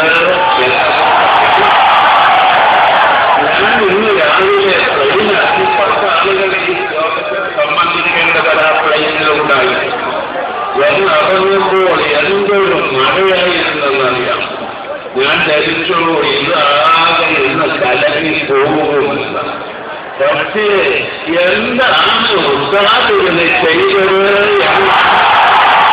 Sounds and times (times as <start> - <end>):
Male speech, man speaking: 0.0 - 1.8, 3.4 - 10.2, 10.8 - 14.5, 15.2 - 19.6, 20.2 - 25.2
Narration, monologue: 0.0 - 1.8, 3.4 - 25.2.